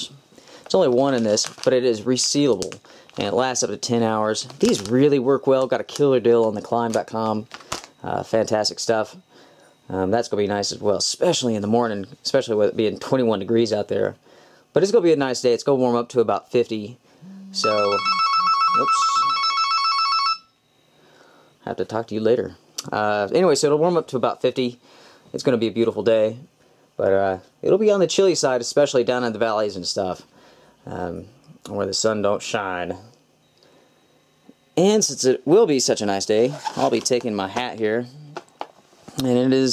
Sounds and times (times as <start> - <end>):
Speech: 0.0 - 9.2, 9.9 - 18.0, 21.6 - 33.2, 34.8 - 38.4, 39.2 - 39.7
Inside, small room: 0.0 - 39.7.